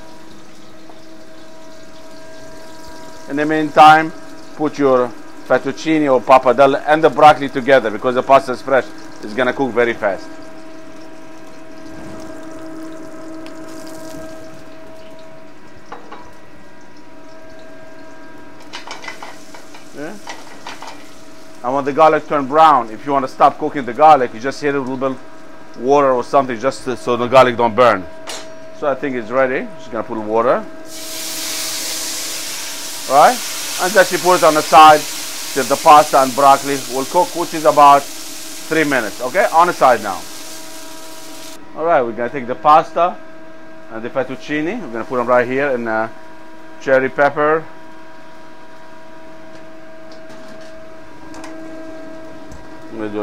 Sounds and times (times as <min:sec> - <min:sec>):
Speech: 0:03.3 - 0:10.3, 0:20.0 - 0:20.2, 0:21.6 - 0:25.2, 0:25.8 - 0:28.1, 0:28.8 - 0:30.7, 0:33.1 - 0:38.1, 0:38.7 - 0:40.2, 0:41.7 - 0:43.2, 0:43.9 - 0:46.2, 0:46.8 - 0:47.7, 0:52.9 - 0:53.2.